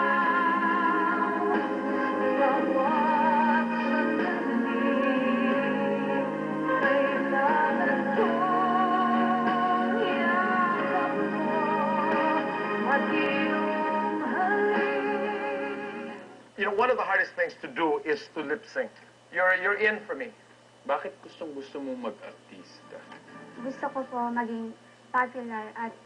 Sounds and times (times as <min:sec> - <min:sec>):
Music: 0:00.0 - 0:16.6, 0:21.9 - 0:25.8
Speech: 0:16.6 - 0:23.1.